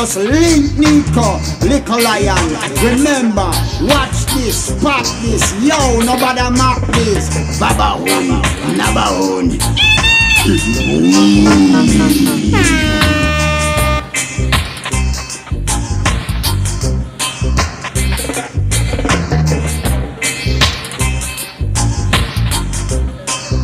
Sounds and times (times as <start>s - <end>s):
Reggae: 0.0s - 23.6s.